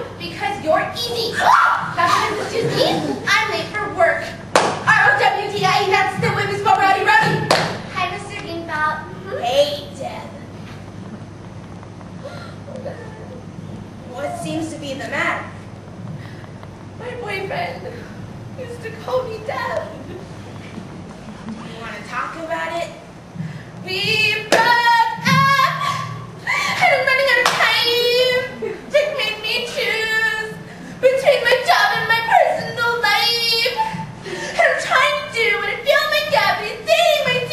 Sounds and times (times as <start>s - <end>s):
Female speech, woman speaking: 0.2s - 10.3s, 14.1s - 15.5s, 17.0s - 18.0s, 18.6s - 20.1s, 21.5s - 23.0s, 26.8s - 33.9s, 34.6s - 37.5s.